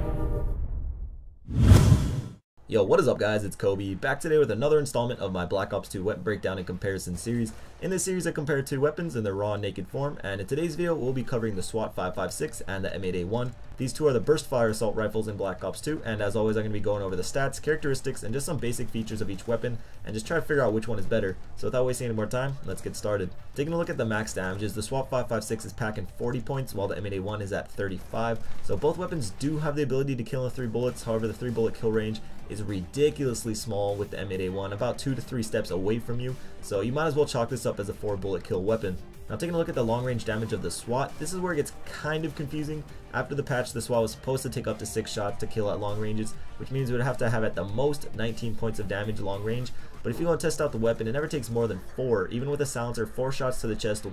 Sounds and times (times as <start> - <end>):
Music: 0.0 - 0.8, 2.7 - 54.1
Speech: 2.6 - 54.1.